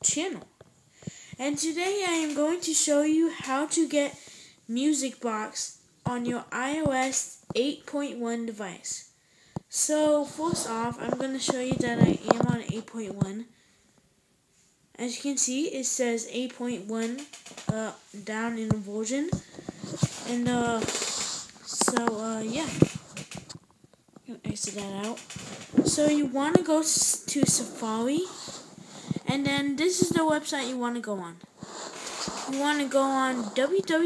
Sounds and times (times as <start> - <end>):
Speech: 0.0 - 0.5, 1.4 - 9.1, 9.7 - 13.5, 15.0 - 19.4, 20.2 - 21.0, 21.7 - 22.9, 24.3 - 25.2, 25.8 - 28.5, 29.2 - 31.4, 32.5 - 34.0.